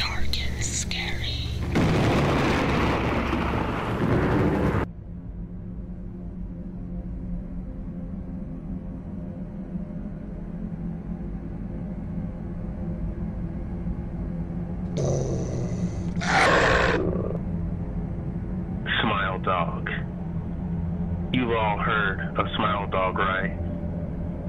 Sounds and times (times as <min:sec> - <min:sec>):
Speech: 0:18.9 - 0:20.1, 0:21.3 - 0:23.6.